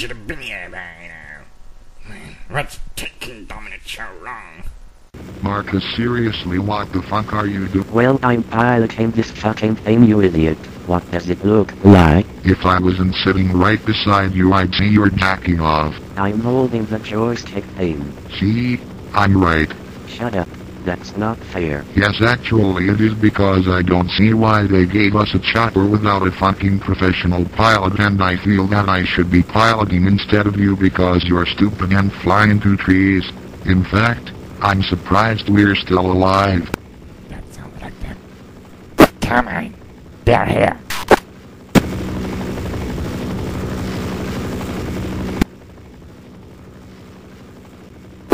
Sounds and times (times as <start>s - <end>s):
Speech: 0.0s - 1.5s, 2.1s - 4.7s, 5.4s - 36.7s.